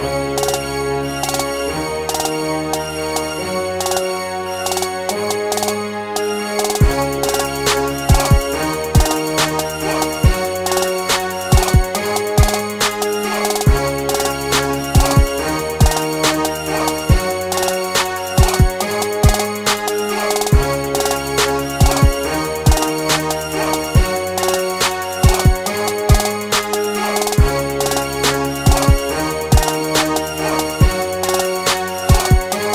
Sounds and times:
Music: 0:00.0 - 0:32.7.

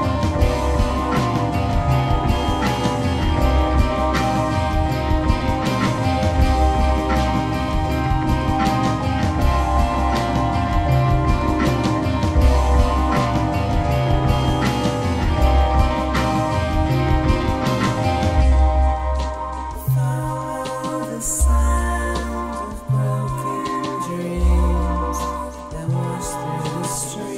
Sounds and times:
Exciting music: 0:00.0 - 0:27.3.

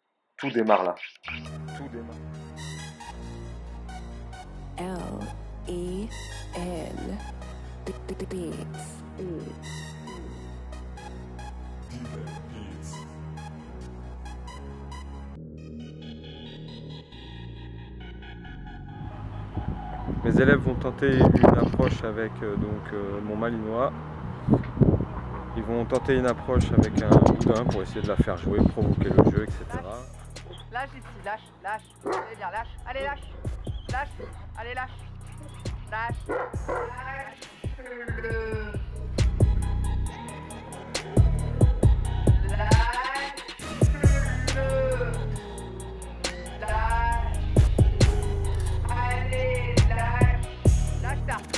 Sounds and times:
Music: 0:00.0 - 0:51.5
Speech: 0:00.4 - 0:01.0, 0:20.2 - 0:23.9, 0:25.6 - 0:30.1, 0:42.6 - 0:45.2.

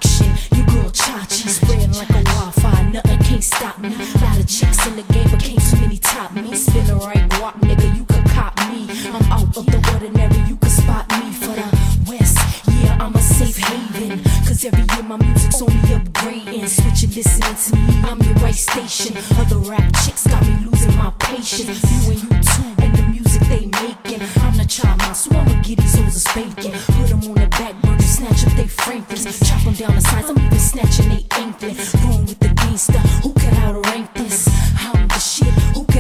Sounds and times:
Pop music: 0:00.0 - 0:36.0.

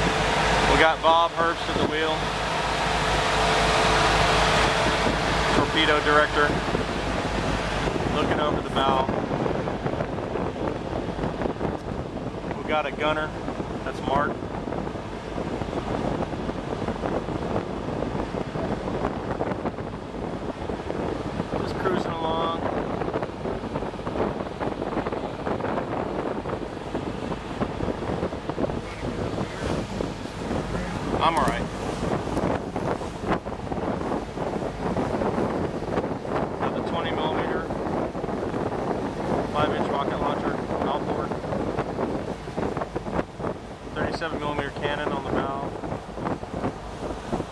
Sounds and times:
Motorboat, speedboat: 0:00.0 - 0:47.5
Speech: 0:00.7 - 0:02.2, 0:05.6 - 0:06.6, 0:08.1 - 0:09.1, 0:12.6 - 0:13.3, 0:13.9 - 0:14.3, 0:21.6 - 0:22.6, 0:30.8 - 0:31.7, 0:36.6 - 0:37.7, 0:39.5 - 0:41.3, 0:44.0 - 0:45.7.

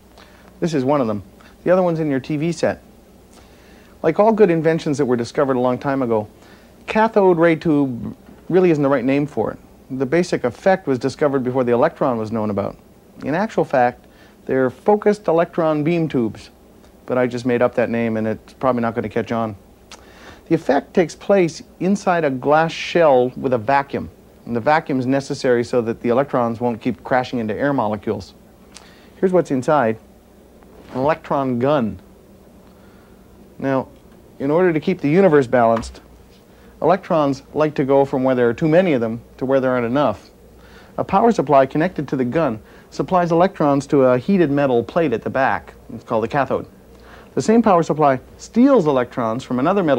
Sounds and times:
Speech: 0:00.6 - 0:02.8, 0:04.0 - 0:06.3, 0:06.9 - 0:19.6, 0:20.5 - 0:28.4, 0:29.2 - 0:30.0, 0:30.9 - 0:32.0, 0:33.6 - 0:36.0, 0:36.8 - 0:40.4, 0:41.0 - 0:46.7, 0:47.4 - 0:49.9.

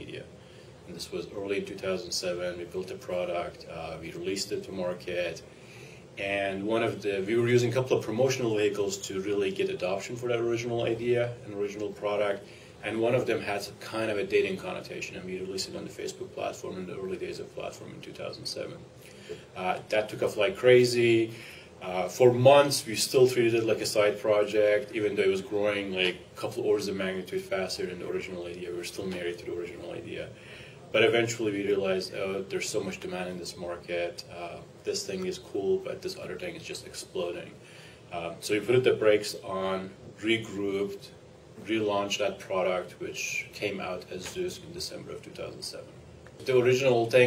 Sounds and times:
Speech: 0:00.0 - 0:05.5, 0:06.2 - 0:18.9, 0:19.5 - 0:47.2.

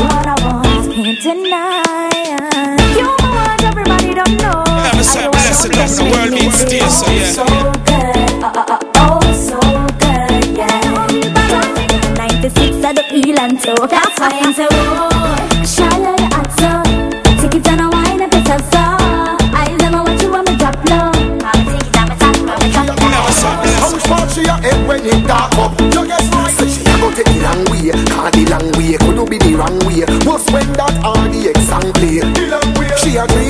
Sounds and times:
Reggae: 0:00.0 - 0:33.5.

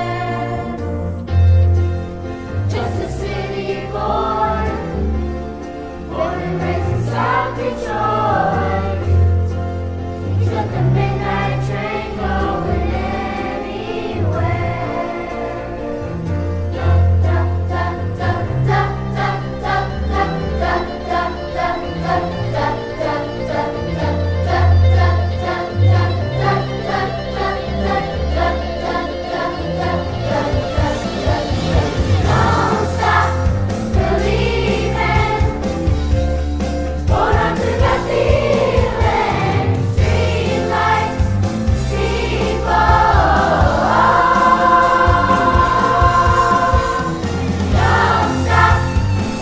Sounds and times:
Choir: 0:00.0 - 0:01.2, 0:02.6 - 0:05.3, 0:06.0 - 0:09.6, 0:10.2 - 0:16.2, 0:16.8 - 0:36.0, 0:37.0 - 0:49.4
Vocal music: 0:00.0 - 0:49.4.

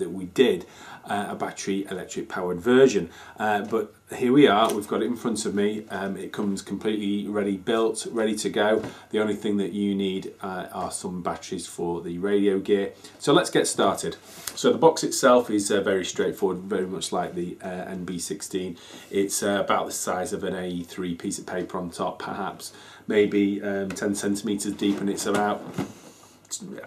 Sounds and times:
Speech: 0:00.0 - 0:25.8, 0:26.5 - 0:26.8.

